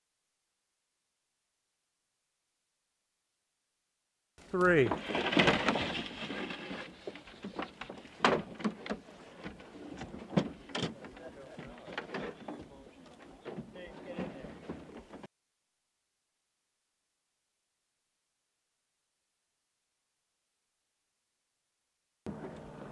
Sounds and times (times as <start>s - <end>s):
Speech: 4.5s - 5.0s, 10.8s - 14.6s.